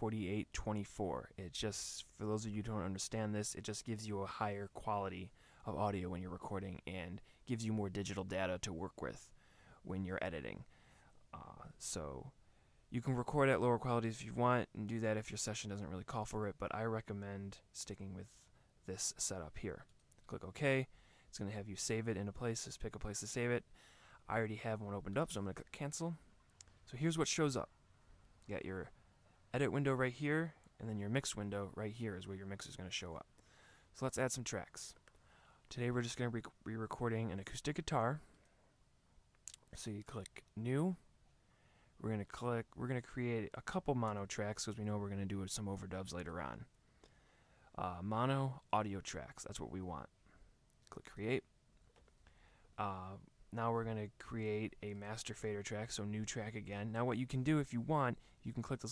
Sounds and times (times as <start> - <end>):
Speech: 0.0 - 10.7, 11.3 - 23.7, 24.3 - 26.2, 26.9 - 27.7, 28.5 - 28.9, 29.5 - 33.3, 34.0 - 35.0, 35.7 - 38.3, 39.5 - 41.0, 42.0 - 46.7, 47.7 - 50.1, 50.9 - 51.5, 52.8 - 58.9.